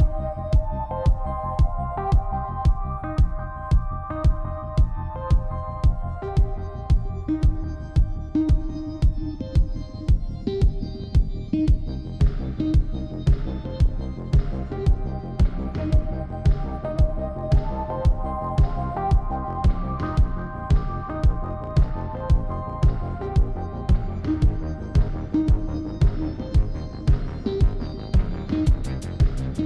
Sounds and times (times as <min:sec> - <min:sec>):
Music: 0:00.0 - 0:29.6.